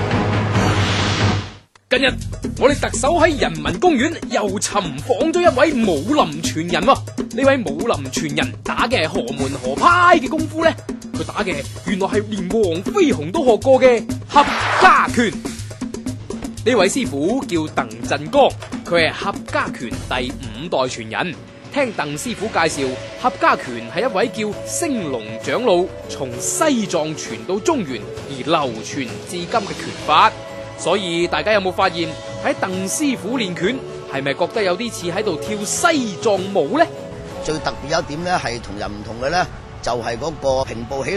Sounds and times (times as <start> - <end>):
Music: 0.0 - 41.1
Speech: 1.9 - 15.4, 16.6 - 41.1.